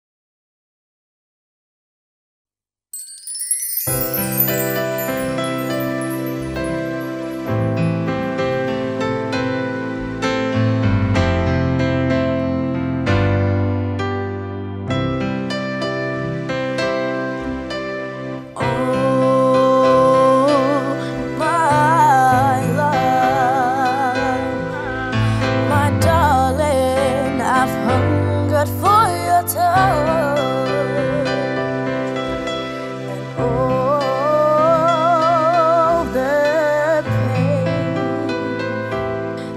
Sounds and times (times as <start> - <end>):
Independent music: 3.0 - 39.5.